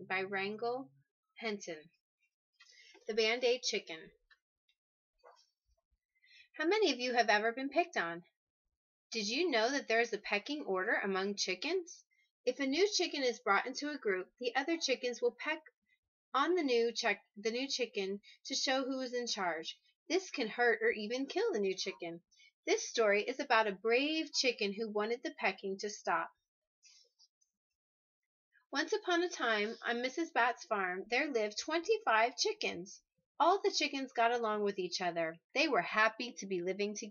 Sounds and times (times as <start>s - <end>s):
Speech: 0.0s - 1.9s, 3.0s - 4.2s, 6.6s - 8.3s, 9.1s - 15.7s, 16.4s - 26.4s, 28.8s - 37.1s.